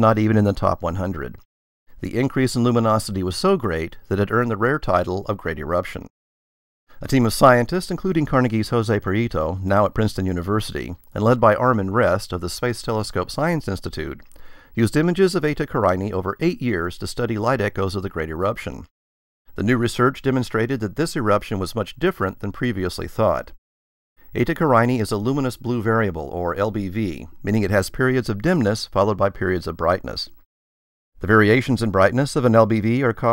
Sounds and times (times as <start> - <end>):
Speech: 0.0 - 1.4, 2.0 - 6.1, 7.0 - 18.9, 19.5 - 23.6, 24.3 - 30.4, 31.2 - 33.3.